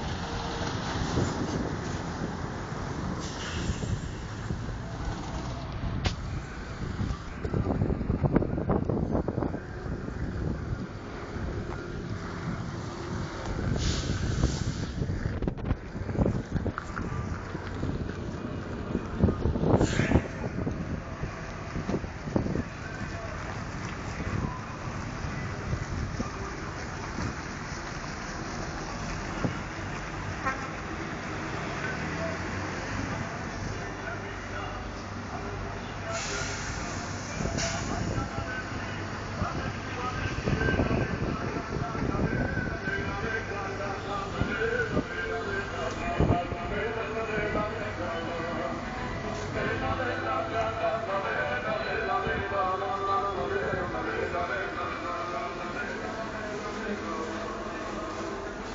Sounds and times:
Vehicle: 0.0s - 58.7s.

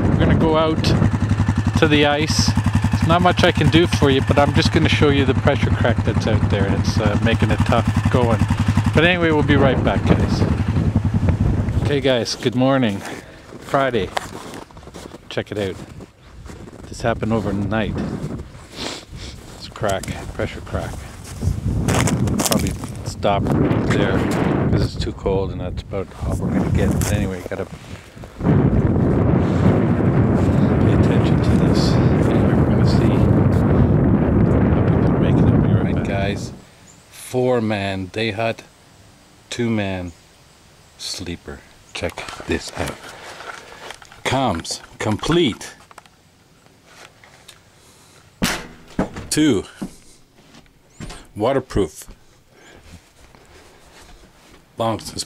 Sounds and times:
Speech: 0.0s - 1.1s, 1.7s - 10.6s, 11.7s - 14.2s, 15.3s - 15.9s, 16.8s - 18.2s, 19.6s - 21.2s, 22.5s - 27.8s, 30.8s - 33.4s, 34.8s - 38.7s, 39.5s - 40.2s, 41.0s - 43.0s, 44.2s - 45.8s, 49.3s - 49.9s, 51.1s - 52.2s, 54.8s - 55.2s.

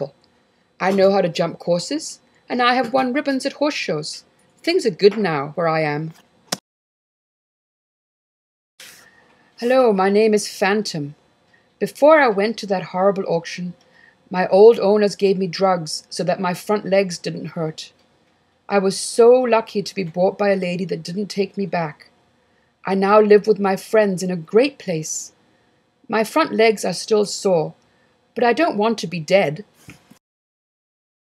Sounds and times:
Speech: 0.8s - 6.2s, 9.6s - 11.2s, 11.8s - 18.0s, 18.7s - 22.1s, 22.8s - 25.4s, 26.1s - 27.8s, 28.4s - 29.7s.

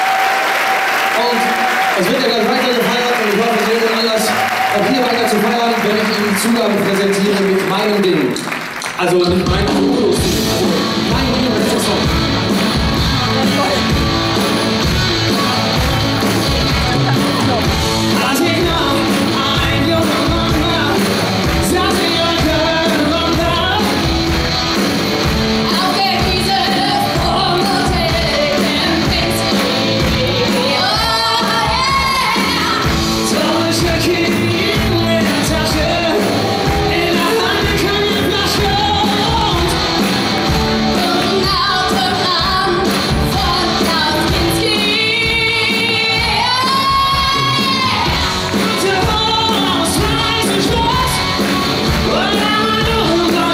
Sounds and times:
Music: 0.0s - 53.5s
Speech: 1.2s - 8.4s, 9.0s - 10.3s.

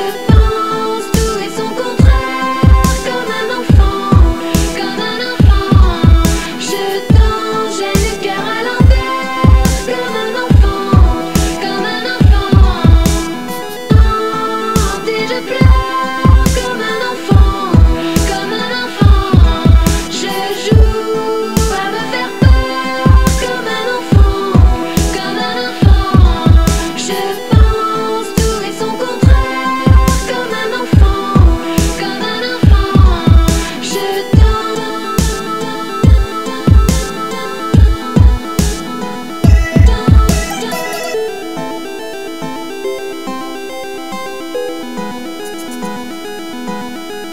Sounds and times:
Dubstep: 0.0s - 47.3s.

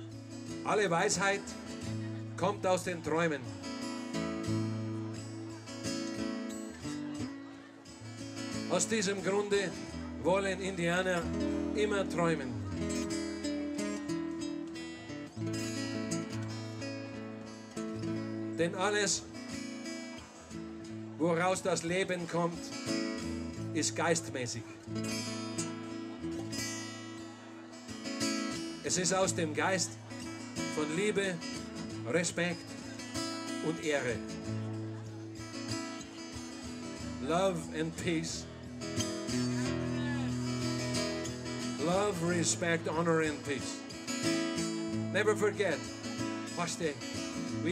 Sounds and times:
Music: 0.0s - 47.7s
Speech: 0.6s - 3.5s, 8.6s - 12.9s, 18.6s - 19.3s, 20.9s - 22.7s, 23.6s - 24.8s, 28.8s - 30.0s, 30.6s - 32.6s, 33.6s - 34.4s, 37.1s - 38.5s, 41.7s - 43.8s, 45.1s - 45.9s, 46.5s - 47.7s.

